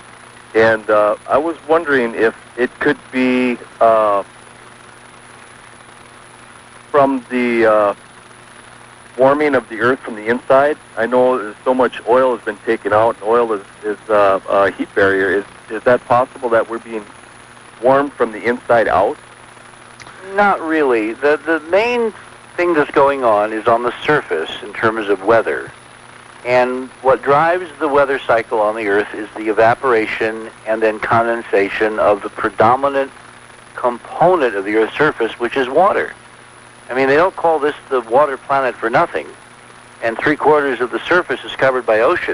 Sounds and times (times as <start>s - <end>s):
Speech: 0.6s - 4.3s, 7.0s - 8.0s, 9.2s - 17.1s, 17.8s - 19.2s, 20.0s - 25.7s, 26.4s - 33.1s, 33.8s - 36.2s, 36.9s - 39.4s, 40.0s - 42.3s.